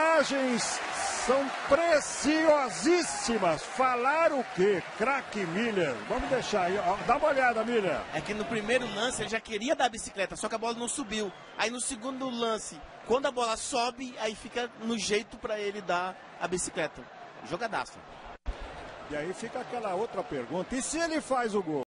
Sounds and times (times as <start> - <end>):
Speech: 0.0 - 18.0, 19.1 - 21.8.